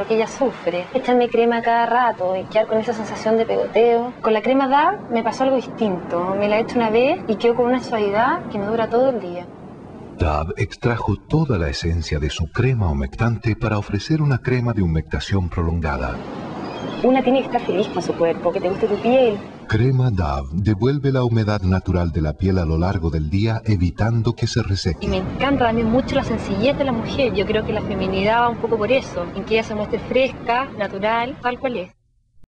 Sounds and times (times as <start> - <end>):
Speech: 10.2 - 16.2, 17.0 - 32.0.